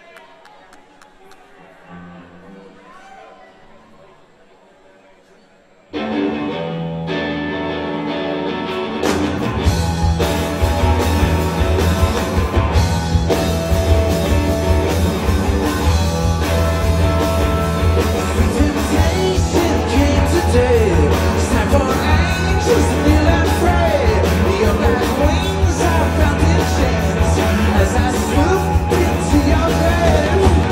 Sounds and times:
Blues: 5.9s - 30.7s
Rhythm and blues: 6.0s - 30.7s.

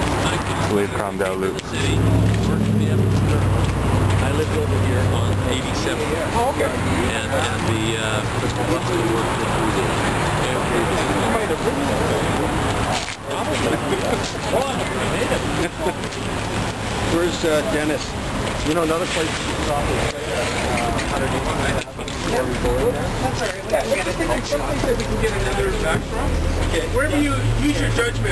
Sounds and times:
Speech: 0.0s - 3.6s, 4.2s - 16.3s, 17.0s - 28.3s
Bus: 0.0s - 28.3s.

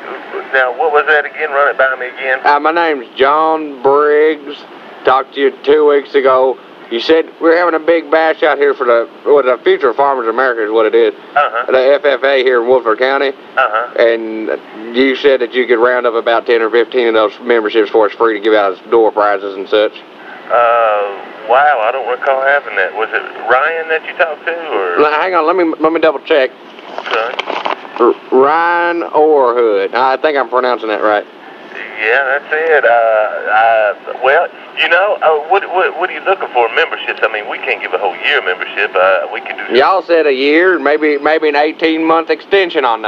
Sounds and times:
Speech: 0.0s - 26.5s, 27.1s - 27.4s, 28.0s - 43.0s.

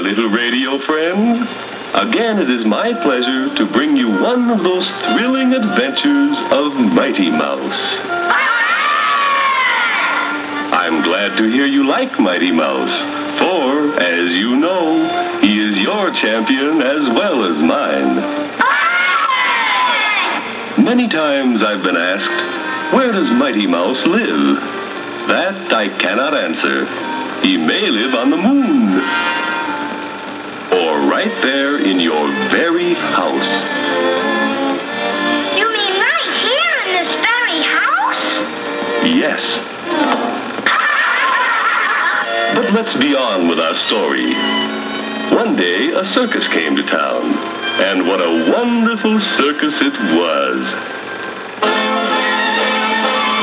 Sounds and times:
Speech: 0.0s - 8.0s, 10.7s - 18.2s, 20.8s - 24.6s, 25.3s - 29.0s, 30.7s - 33.7s, 35.6s - 38.4s, 39.0s - 39.6s, 42.5s - 44.4s, 45.3s - 50.8s
Music: 0.0s - 53.4s.

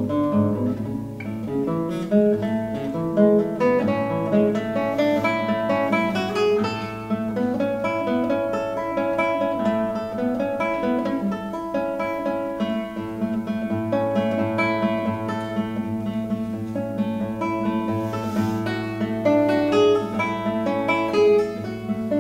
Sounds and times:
Guitar: 0.0s - 22.2s.

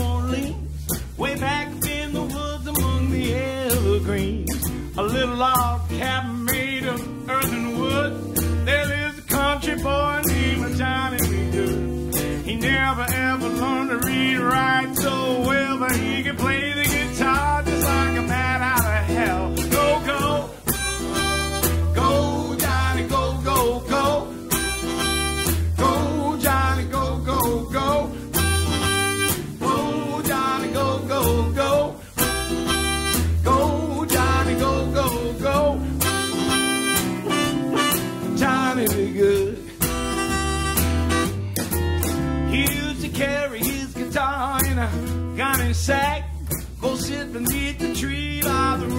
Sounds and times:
Singing: 12.4s - 24.7s, 25.8s - 28.8s, 29.6s - 36.4s, 37.8s - 39.7s, 45.4s - 48.9s.

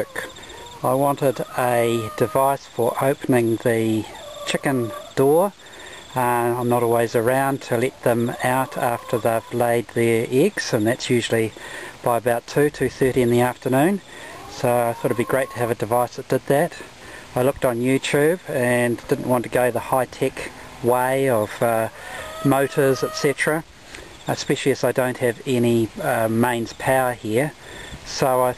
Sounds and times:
Speech: 0.0s - 5.5s, 6.2s - 23.6s, 24.3s - 28.5s.

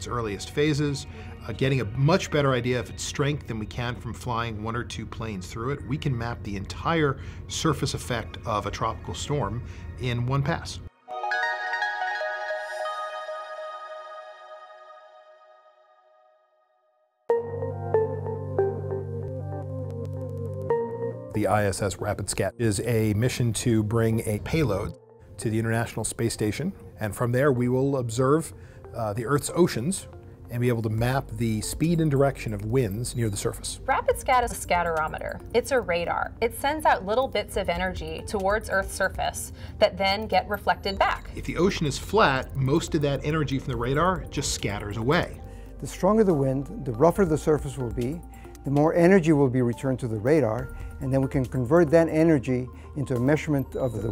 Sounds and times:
Speech: 0.0s - 10.9s, 21.4s - 54.1s
Music: 0.0s - 54.1s.

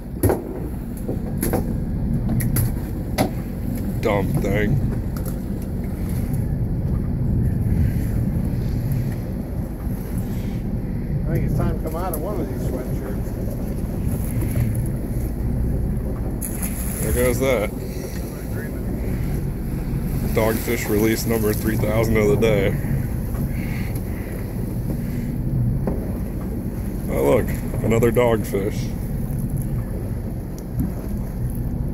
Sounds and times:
Speech: 4.0s - 4.8s, 11.3s - 13.3s, 17.0s - 17.7s, 20.3s - 22.8s, 27.1s - 29.0s.

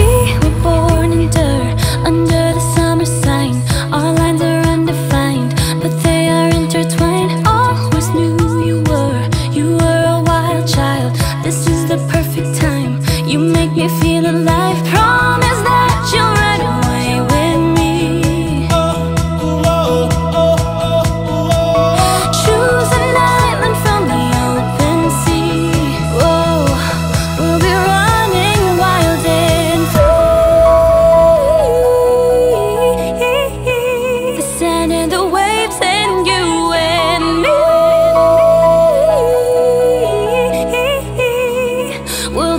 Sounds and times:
Music: 0.0s - 42.5s.

